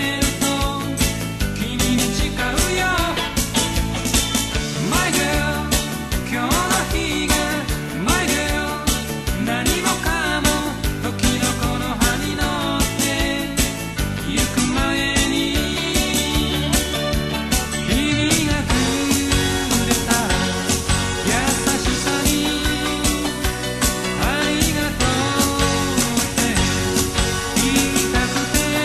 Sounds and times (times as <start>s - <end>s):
Music: 0.0s - 28.8s.